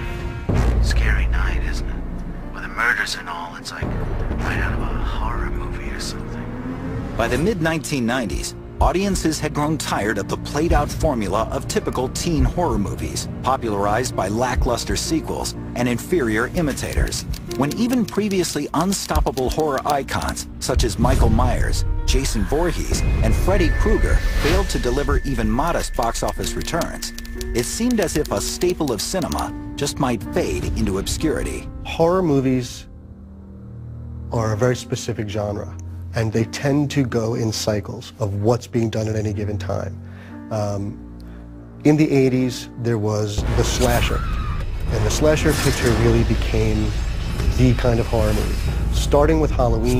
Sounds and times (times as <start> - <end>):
Music: 0.0 - 49.9
Speech: 34.4 - 39.9, 44.9 - 46.9, 47.6 - 49.9.